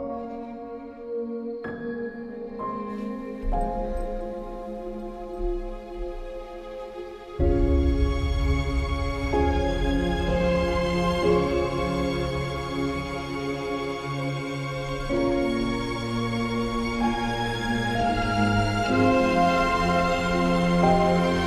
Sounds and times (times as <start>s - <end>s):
Music: 0.0s - 21.4s.